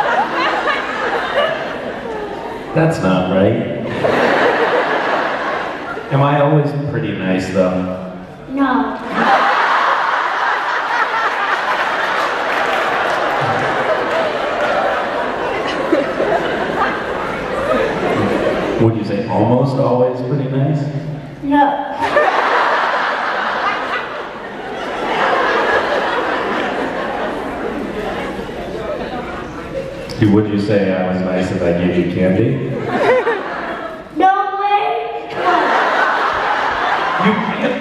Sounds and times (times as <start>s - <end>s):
Male speech, man speaking: 2.8s - 3.8s, 6.1s - 8.1s, 18.8s - 21.1s, 30.1s - 32.8s, 37.2s - 37.8s.